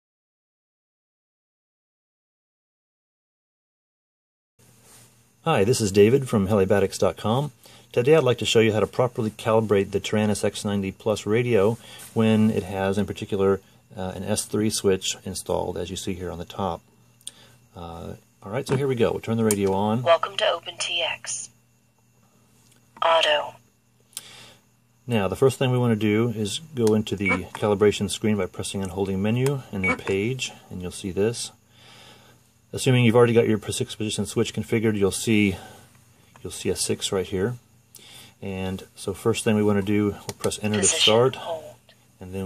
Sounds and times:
Inside, small room: 0:04.6 - 0:42.4
Speech: 0:05.4 - 0:16.8, 0:17.8 - 0:21.5, 0:23.0 - 0:23.6, 0:25.1 - 0:31.6, 0:32.7 - 0:35.6, 0:36.4 - 0:37.6, 0:38.4 - 0:42.4.

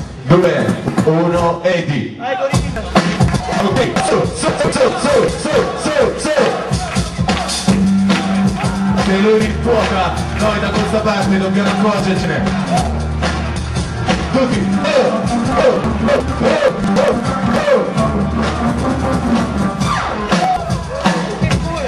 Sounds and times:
Music: 0:00.0 - 0:01.8, 0:02.4 - 0:21.8
Speech: 0:00.3 - 0:06.6, 0:09.0 - 0:12.5, 0:21.2 - 0:21.8.

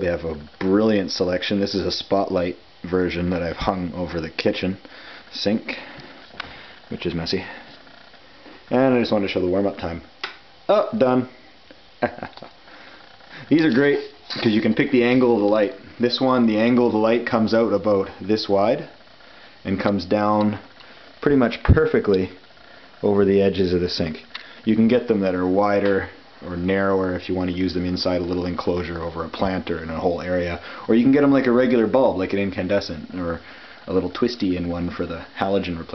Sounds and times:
Speech: 0:00.0 - 0:05.9, 0:06.9 - 0:07.6, 0:08.7 - 0:10.1, 0:10.7 - 0:11.3, 0:13.5 - 0:19.0, 0:19.6 - 0:22.4, 0:23.0 - 0:35.9.

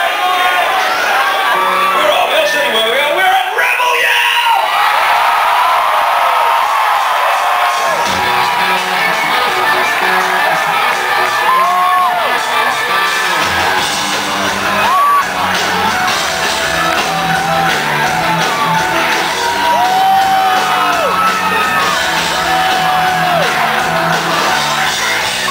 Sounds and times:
Crowd: 0:00.0 - 0:25.5
Music: 0:00.8 - 0:03.2, 0:07.6 - 0:25.5.

